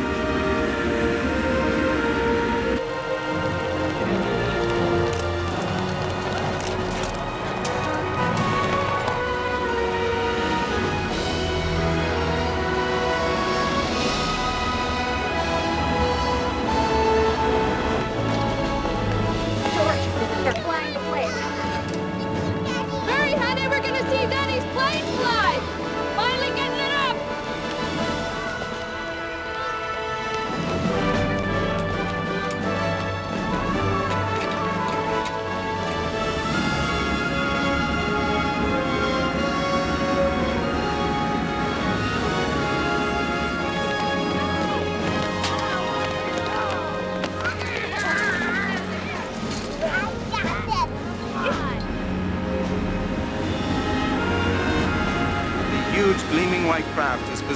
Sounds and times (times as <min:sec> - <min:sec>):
Music: 0:00.0 - 0:57.5.